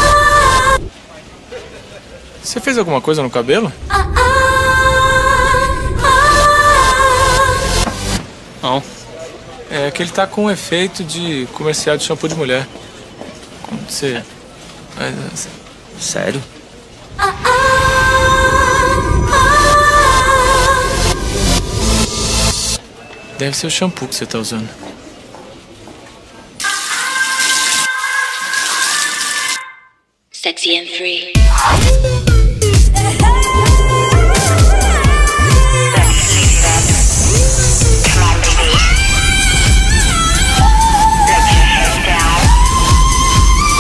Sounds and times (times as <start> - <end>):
Music: 3.9 - 8.2, 17.3 - 22.8, 31.4 - 43.8.